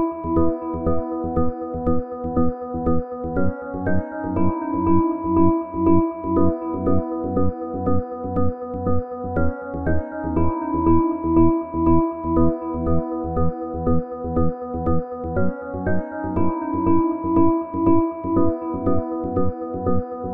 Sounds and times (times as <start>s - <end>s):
Synthesizer: 0.0s - 20.3s.